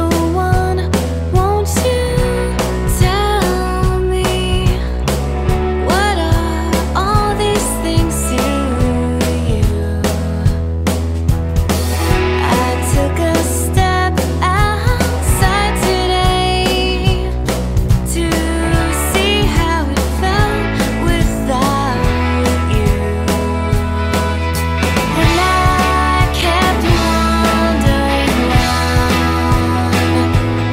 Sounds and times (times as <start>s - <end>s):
Music: 0.0s - 30.7s.